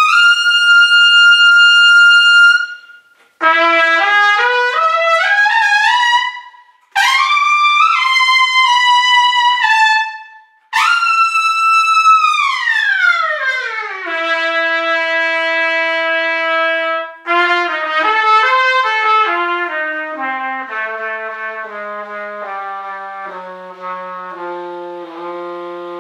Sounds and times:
Trumpet: 0.0 - 26.0.

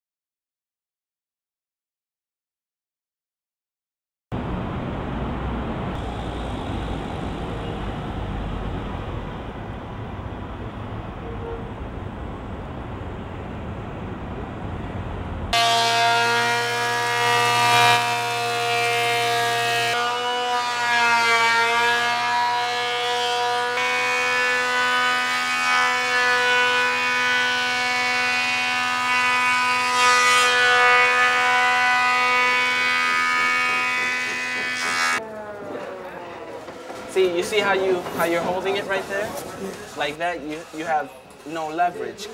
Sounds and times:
Speech: 37.1 - 42.3.

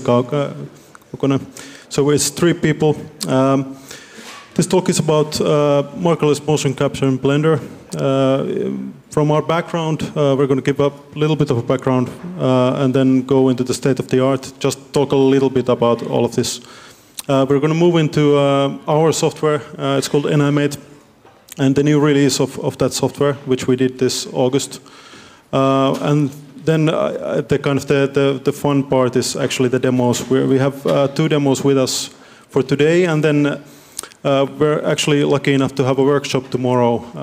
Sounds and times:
Speech: 0.0 - 24.8, 25.5 - 37.2.

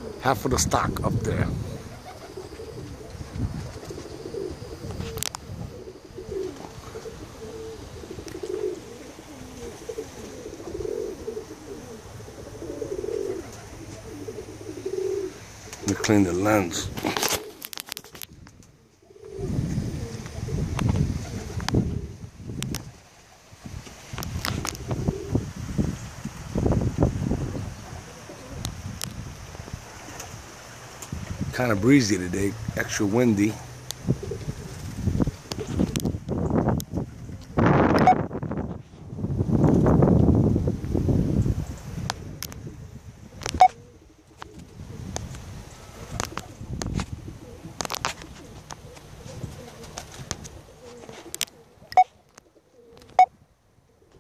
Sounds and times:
Pigeon, dove: 1.0 - 25.5, 27.4 - 29.1, 43.3 - 54.2.

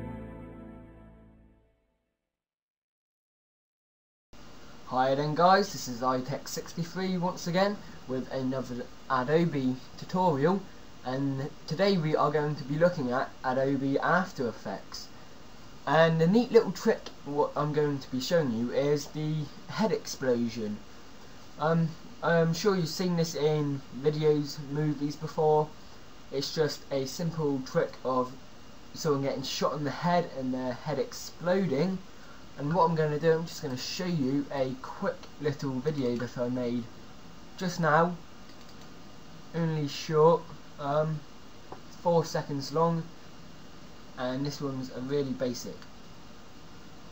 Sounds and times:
Music: 0.0 - 2.0
Speech: 4.9 - 15.2, 15.9 - 20.9, 21.6 - 28.4, 29.0 - 36.9, 37.6 - 38.3, 39.5 - 41.3, 42.0 - 43.2, 44.2 - 45.9.

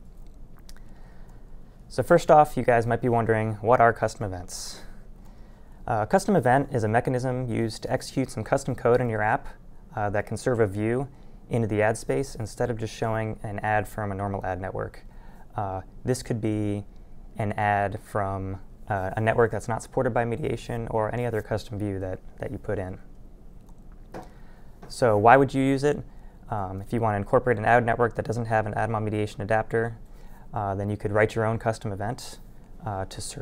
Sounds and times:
Speech: 1.9 - 5.0, 5.9 - 23.1, 24.8 - 33.4.

